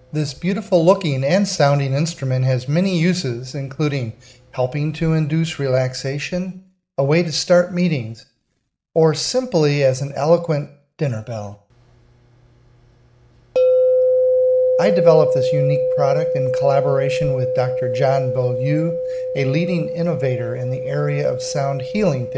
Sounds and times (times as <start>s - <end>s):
Speech: 0.1s - 8.3s, 9.0s - 11.7s, 14.8s - 22.3s.